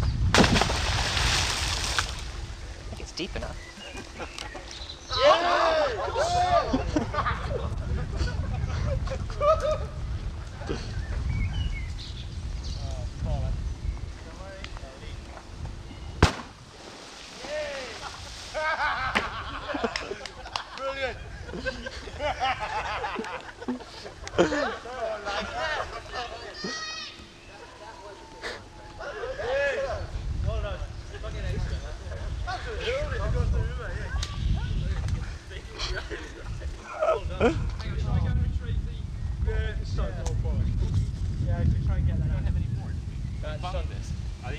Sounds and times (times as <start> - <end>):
Chirp, tweet: 3.5 - 5.2, 10.8 - 13.0, 43.1 - 43.9.